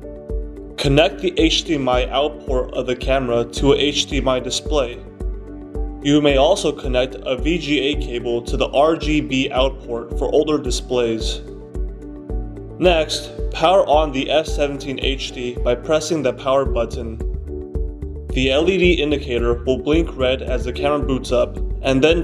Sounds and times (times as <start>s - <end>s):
Music: 0.0s - 22.2s
Speech: 0.8s - 5.0s, 6.0s - 11.4s, 12.8s - 17.2s, 18.4s - 22.2s.